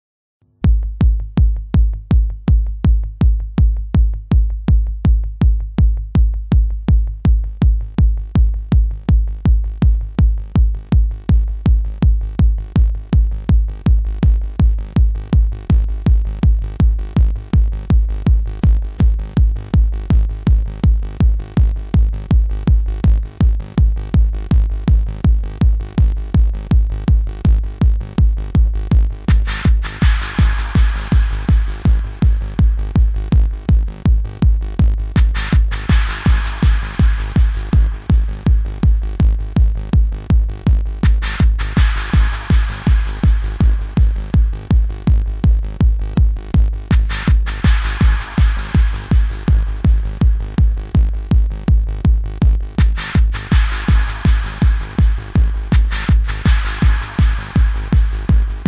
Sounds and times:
Drum machine: 0.6 - 58.6.

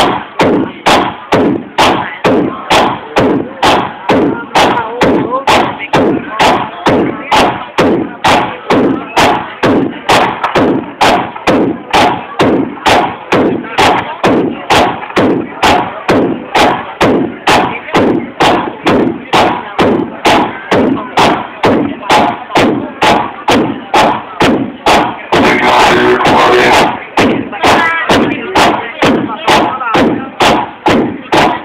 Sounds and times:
Music: 0.0 - 31.6
Speech: 0.0 - 31.6.

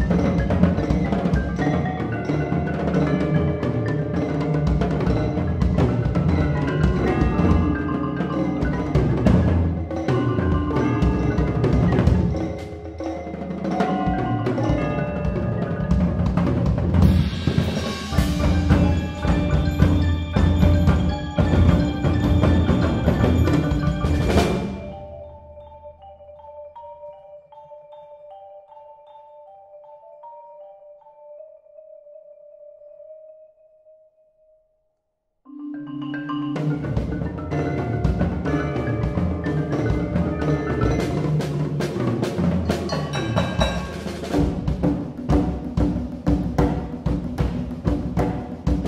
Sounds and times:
Drum: 0.0 - 25.2, 36.3 - 48.8
Drum kit: 0.0 - 25.2, 36.3 - 48.8.

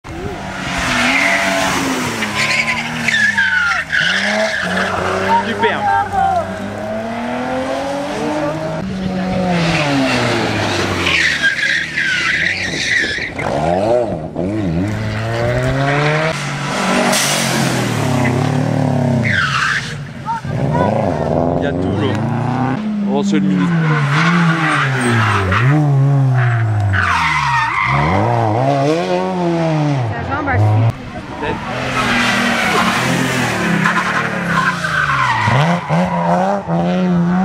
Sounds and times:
Race car, auto racing: 0.0 - 37.4
Tire squeal: 0.3 - 6.5, 9.6 - 14.0, 15.7 - 21.1, 23.5 - 28.6, 31.8 - 37.4.

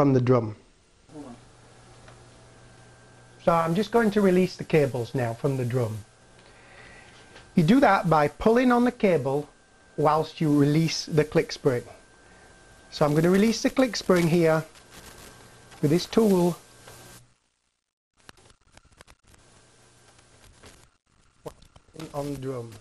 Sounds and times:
Speech: 0.0 - 1.4, 3.4 - 6.1, 7.6 - 12.0, 13.0 - 14.7, 15.8 - 16.6, 22.0 - 22.8.

